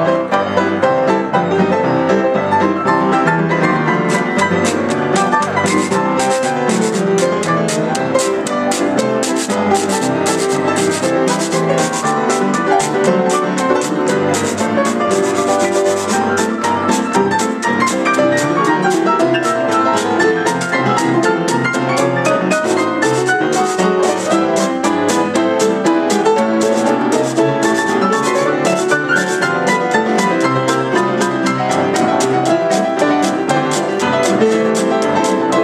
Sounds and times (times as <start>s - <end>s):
Electric piano: 0.0s - 35.6s.